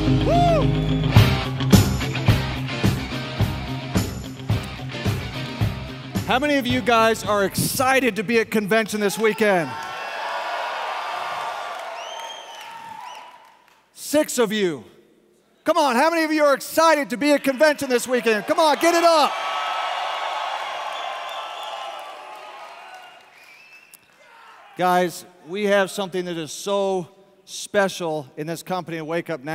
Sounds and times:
Narration, monologue: 0:06.2 - 0:09.8, 0:13.9 - 0:19.3, 0:24.8 - 0:29.5
Male speech, man speaking: 0:06.3 - 0:09.8, 0:14.0 - 0:14.9, 0:15.6 - 0:19.3, 0:24.8 - 0:29.5.

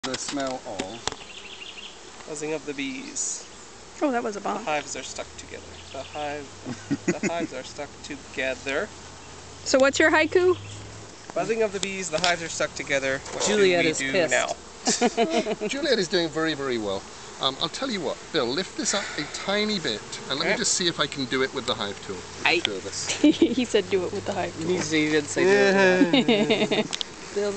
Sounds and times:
Bee, wasp, etc.: 0:00.0 - 0:27.5.

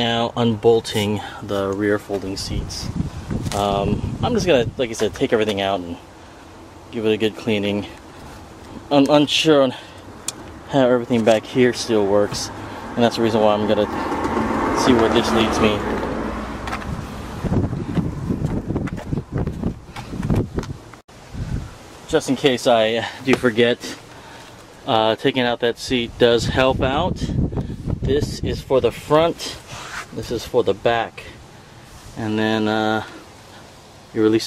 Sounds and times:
Speech: 0:00.0 - 0:02.9, 0:03.5 - 0:06.0, 0:06.9 - 0:08.0, 0:08.9 - 0:09.9, 0:10.7 - 0:14.0, 0:14.8 - 0:15.9, 0:22.1 - 0:24.0, 0:24.9 - 0:27.4, 0:28.0 - 0:31.4, 0:32.2 - 0:33.2, 0:34.1 - 0:34.4
Outside, urban or manmade: 0:00.0 - 0:34.4.

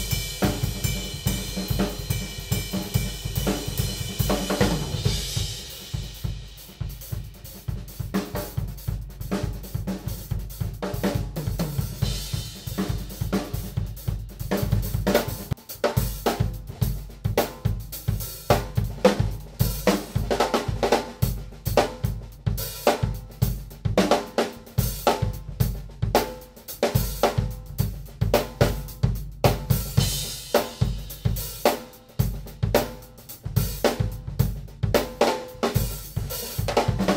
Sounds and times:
Drum: 0:00.0 - 0:37.1
Drum kit: 0:00.0 - 0:37.1.

